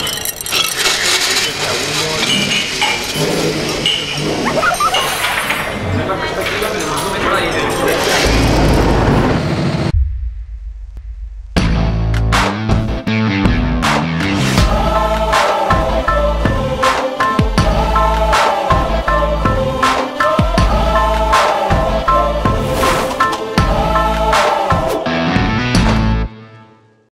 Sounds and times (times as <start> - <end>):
Music: 10.9 - 27.1.